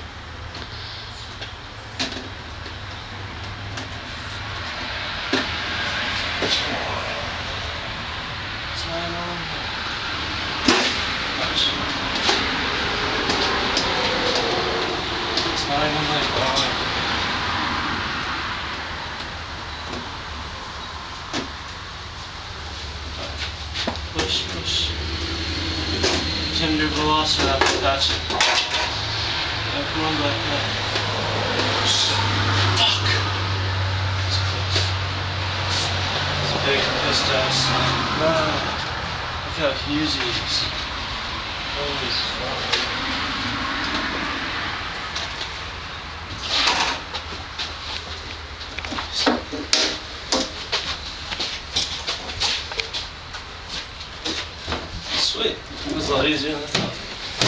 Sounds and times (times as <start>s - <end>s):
Outside, urban or manmade: 0.0s - 57.4s
Speech: 8.8s - 9.6s, 15.6s - 16.8s, 24.1s - 25.0s, 26.5s - 28.2s, 29.7s - 30.7s, 36.5s - 38.7s, 39.5s - 40.7s, 41.8s - 42.8s, 55.2s - 57.0s.